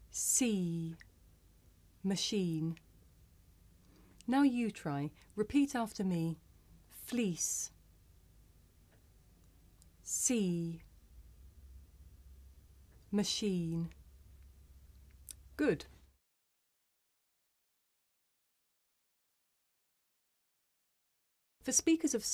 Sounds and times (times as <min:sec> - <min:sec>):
Speech: 0:00.1 - 0:01.0, 0:02.0 - 0:02.8, 0:04.2 - 0:07.8, 0:10.0 - 0:10.9, 0:13.1 - 0:14.0, 0:15.6 - 0:16.0, 0:21.6 - 0:22.3.